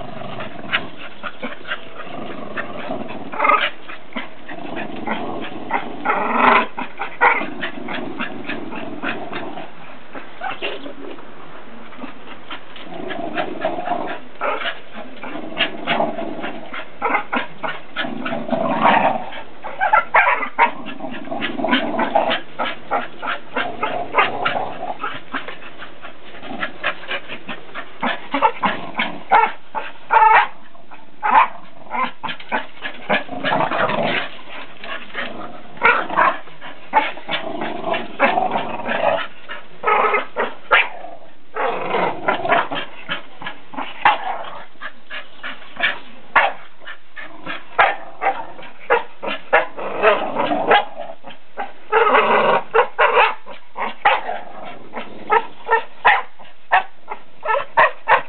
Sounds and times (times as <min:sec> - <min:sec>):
Canidae, dogs, wolves: 0:00.0 - 0:11.2, 0:11.8 - 0:58.2.